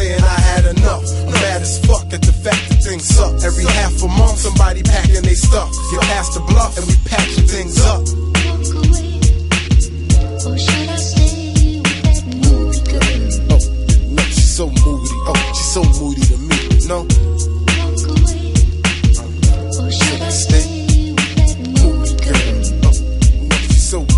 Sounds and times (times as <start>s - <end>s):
Singing: 0.0s - 9.4s, 10.4s - 24.1s
Hip hop music: 0.0s - 24.1s.